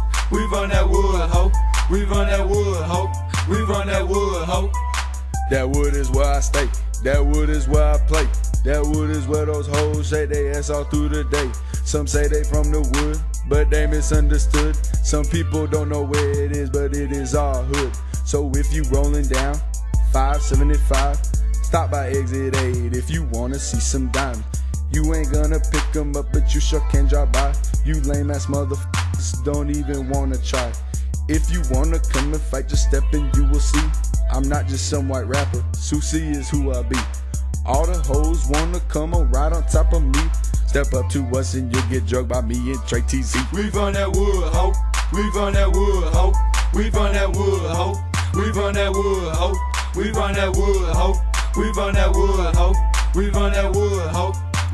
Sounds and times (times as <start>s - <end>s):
Music: 0.0s - 54.7s.